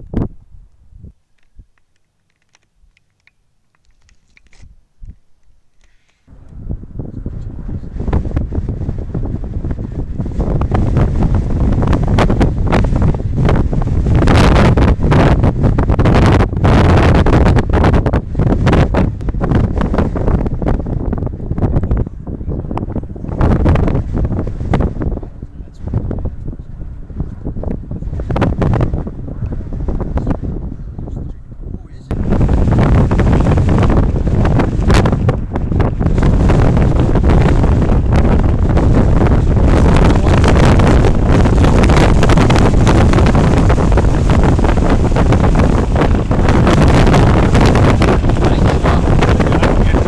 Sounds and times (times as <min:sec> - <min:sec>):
Wind noise (microphone): 0:00.0 - 0:03.2, 0:03.8 - 0:05.3, 0:06.3 - 0:50.0
Fire: 0:00.0 - 0:50.0.